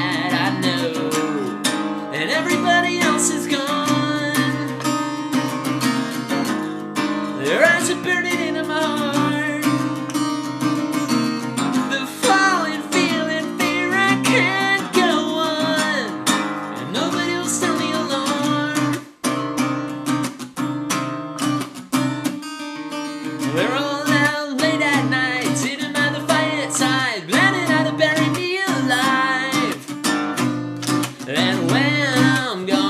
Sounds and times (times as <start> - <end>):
Music: 0.0 - 32.9.